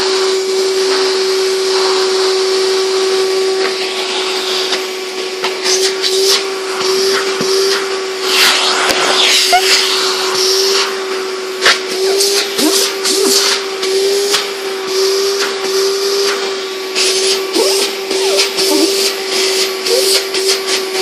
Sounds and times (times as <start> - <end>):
Inside, small room: 0.0 - 21.0
Vacuum cleaner: 0.0 - 21.0.